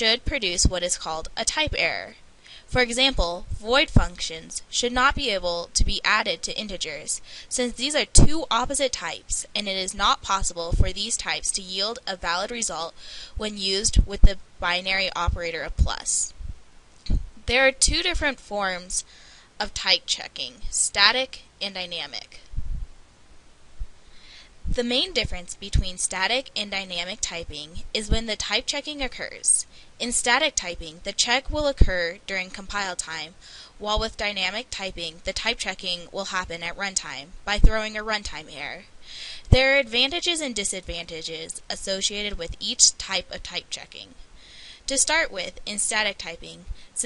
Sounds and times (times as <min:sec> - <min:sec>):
Speech: 0:00.0 - 0:16.4, 0:17.1 - 0:22.4, 0:24.7 - 0:38.9, 0:39.5 - 0:44.2, 0:44.9 - 0:47.0.